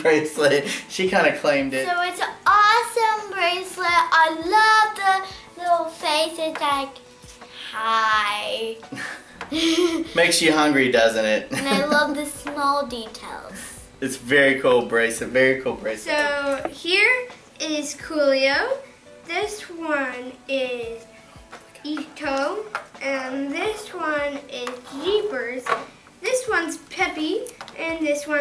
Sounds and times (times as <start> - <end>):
Inside, small room: 0.0 - 28.4
Music: 0.0 - 28.4
Child speech, kid speaking: 1.8 - 7.0, 7.6 - 8.8, 11.6 - 13.8, 16.1 - 21.0, 21.8 - 28.4.